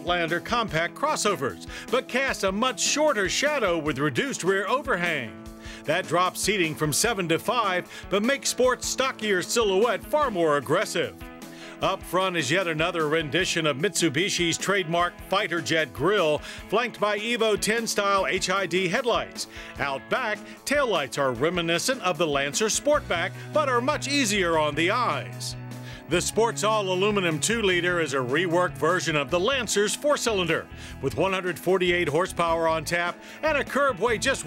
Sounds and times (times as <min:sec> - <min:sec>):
Speech: 0:00.0 - 0:11.2, 0:11.8 - 0:34.4
Music: 0:00.0 - 0:34.4.